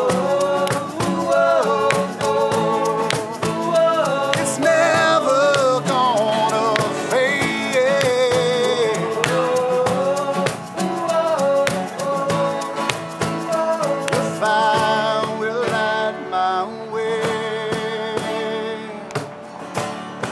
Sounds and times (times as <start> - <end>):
Country: 0.0 - 20.3.